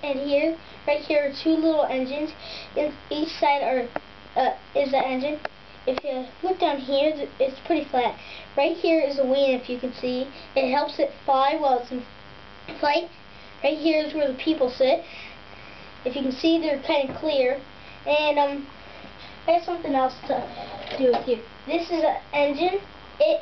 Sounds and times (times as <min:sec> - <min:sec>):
Speech: 0:00.0 - 0:12.1, 0:12.7 - 0:15.1, 0:16.0 - 0:18.7, 0:19.5 - 0:23.4.